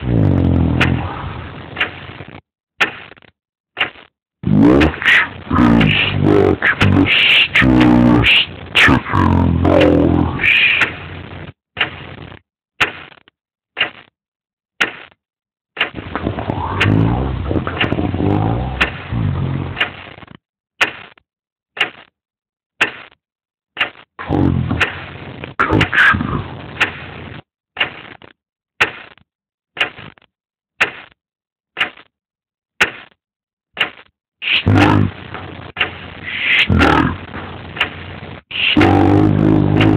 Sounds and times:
Speech: 0.0 - 1.3, 4.5 - 11.0, 16.2 - 19.8, 24.2 - 25.0, 25.6 - 26.6, 34.4 - 35.2, 36.3 - 37.3, 38.5 - 39.9.

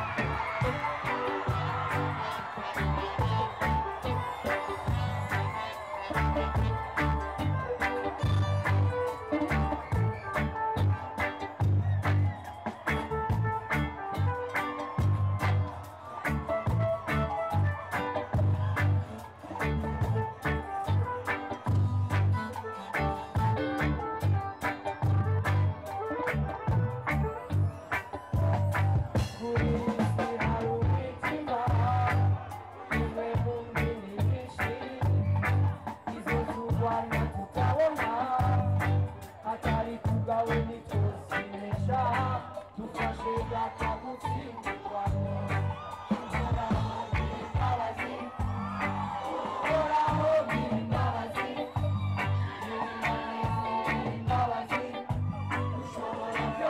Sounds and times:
Music: 0.0 - 56.6
Singing: 29.2 - 56.6.

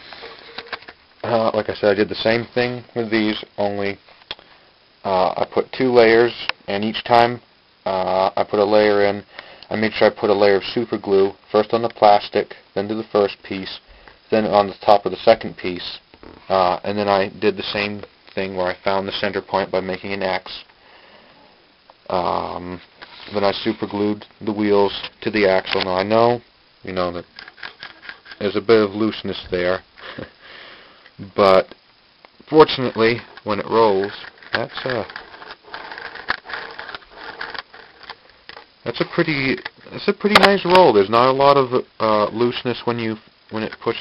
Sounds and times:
Speech: 1.2 - 4.0, 5.0 - 20.7, 22.1 - 27.3, 28.4 - 29.8, 31.2 - 31.8, 32.5 - 35.1, 38.8 - 44.0.

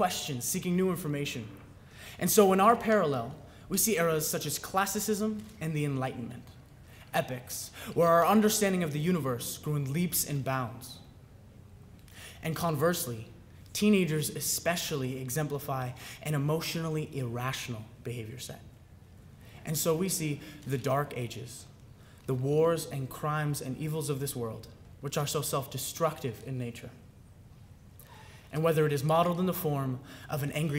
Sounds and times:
Male speech, man speaking: 0.0 - 1.6, 2.2 - 11.0, 12.4 - 18.7, 19.6 - 21.7, 22.3 - 27.0, 28.5 - 30.7
Narration, monologue: 0.0 - 30.7.

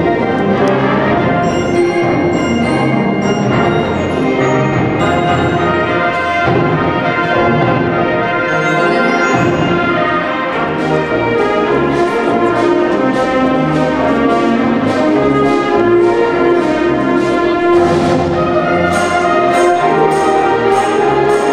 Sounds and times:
Music: 0.0 - 21.5.

